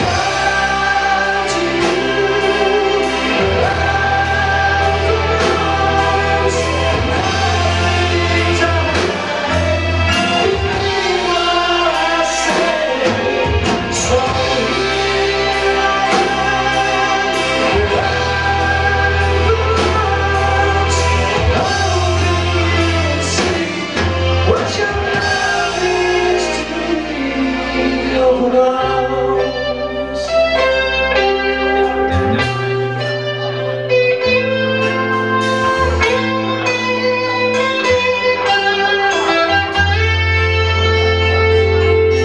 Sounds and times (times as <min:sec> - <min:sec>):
Inside, large room or hall: 0:00.0 - 0:42.2
Music: 0:00.0 - 0:42.2.